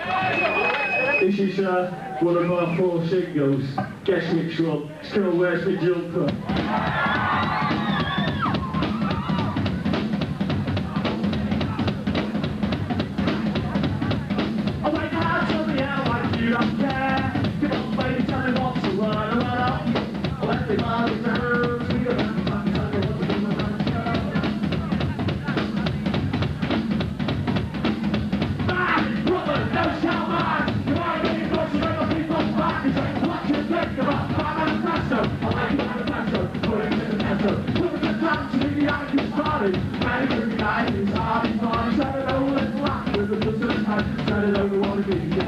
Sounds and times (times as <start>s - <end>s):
Speech: 0.0s - 6.4s, 13.1s - 15.6s, 22.8s - 26.9s
Music: 6.1s - 45.4s.